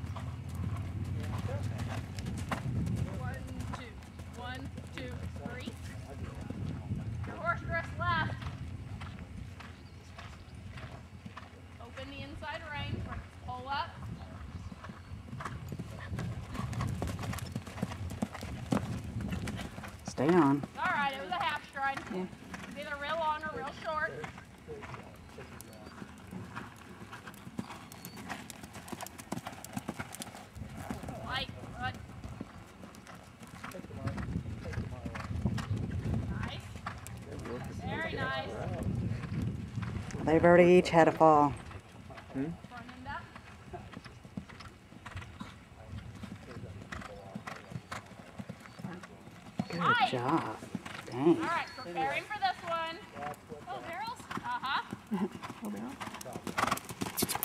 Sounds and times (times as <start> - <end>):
Clip-clop: 0.0 - 57.4.